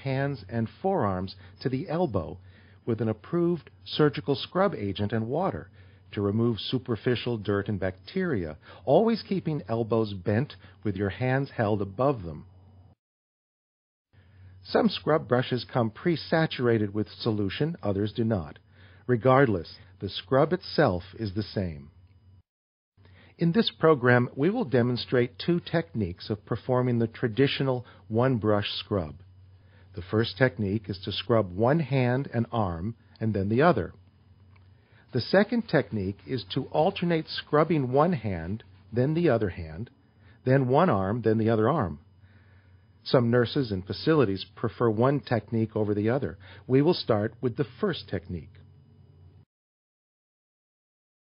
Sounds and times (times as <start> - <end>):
Speech: 0.0 - 12.5, 14.6 - 22.0, 23.4 - 29.3, 29.9 - 34.0, 35.1 - 42.1, 43.0 - 48.6
Inside, small room: 0.0 - 13.0, 14.1 - 49.5.